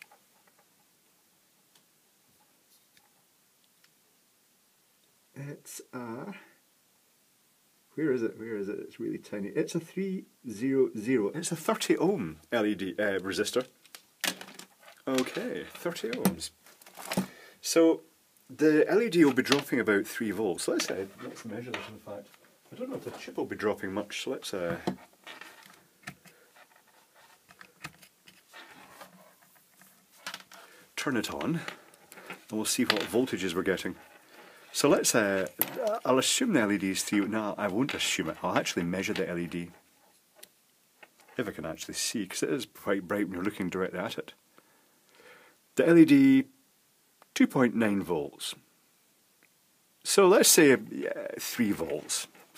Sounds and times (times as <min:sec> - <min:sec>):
Speech: 0:05.4 - 0:06.6, 0:08.0 - 0:13.7, 0:15.0 - 0:16.6, 0:17.6 - 0:24.9, 0:31.0 - 0:31.7, 0:32.5 - 0:34.0, 0:34.7 - 0:39.8, 0:41.4 - 0:44.4, 0:45.8 - 0:46.6, 0:47.4 - 0:48.6, 0:50.0 - 0:52.3.